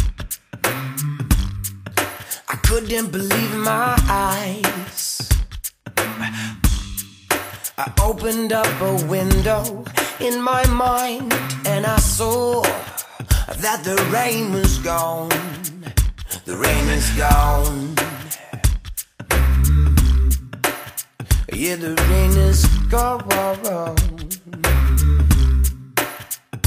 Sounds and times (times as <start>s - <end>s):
Music: 0.0s - 26.6s.